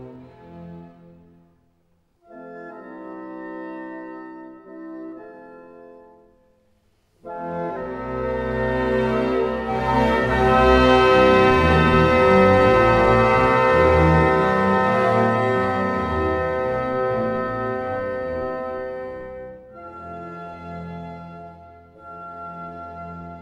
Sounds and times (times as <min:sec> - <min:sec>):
Organ: 0:02.2 - 0:06.4, 0:07.2 - 0:23.4.